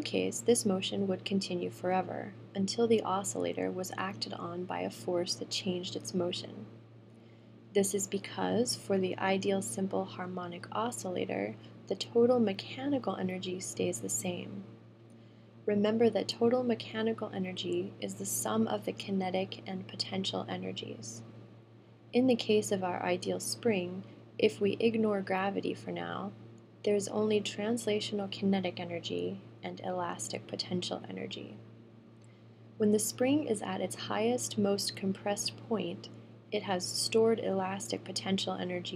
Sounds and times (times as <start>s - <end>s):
Speech: 0.0s - 6.7s, 7.8s - 14.7s, 15.7s - 21.2s, 22.2s - 31.6s, 32.8s - 38.9s.